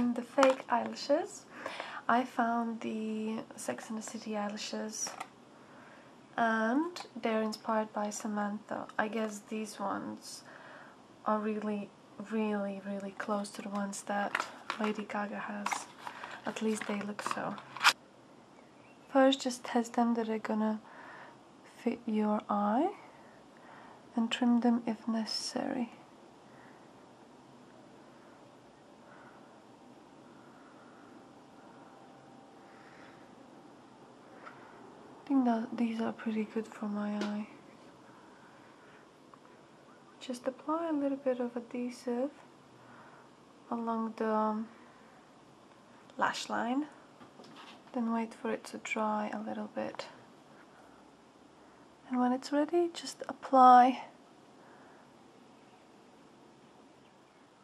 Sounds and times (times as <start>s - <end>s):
Speech: 0.0s - 5.2s, 6.4s - 10.5s, 11.3s - 15.9s, 16.5s - 17.6s, 19.1s - 20.8s, 21.7s - 23.1s, 24.1s - 26.0s, 35.2s - 37.6s, 40.2s - 42.4s, 43.7s - 44.7s, 46.2s - 47.0s, 47.9s - 50.2s, 52.1s - 54.2s.